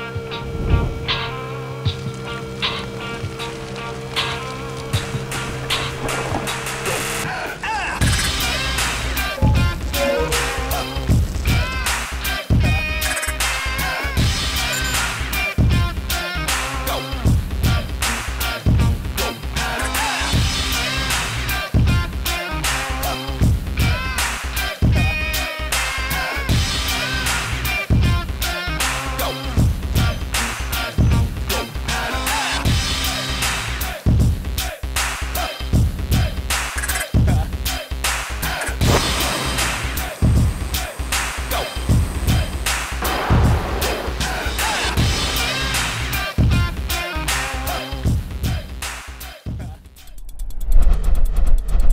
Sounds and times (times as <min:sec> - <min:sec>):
Music: 0:00.0 - 0:51.9.